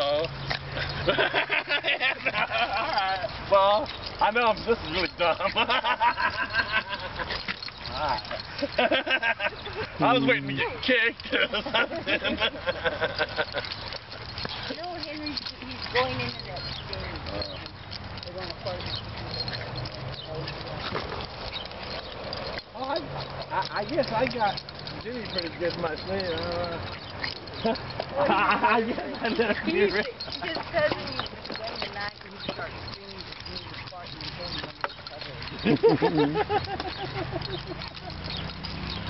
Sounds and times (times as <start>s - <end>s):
Outside, rural or natural: 0.0s - 39.0s
Dog: 4.9s - 39.0s.